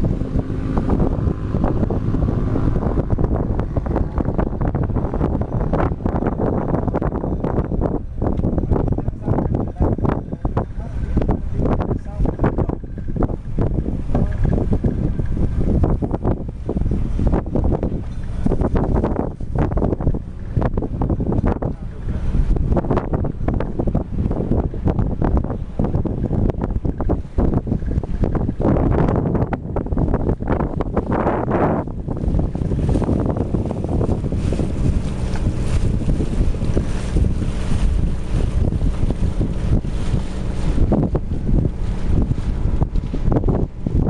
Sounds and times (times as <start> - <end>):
Boat, Water vehicle: 0.0 - 44.1
Speech: 8.9 - 11.1, 11.9 - 12.8, 14.1 - 14.6, 21.6 - 22.4.